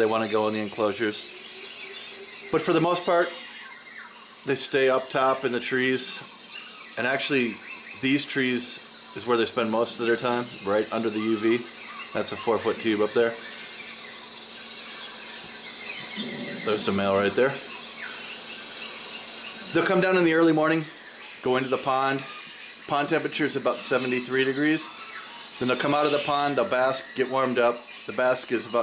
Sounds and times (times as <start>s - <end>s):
Speech: 0.0s - 1.3s, 2.6s - 3.4s, 4.5s - 6.3s, 7.0s - 13.4s, 16.2s - 17.7s, 19.7s - 24.9s, 25.6s - 28.8s.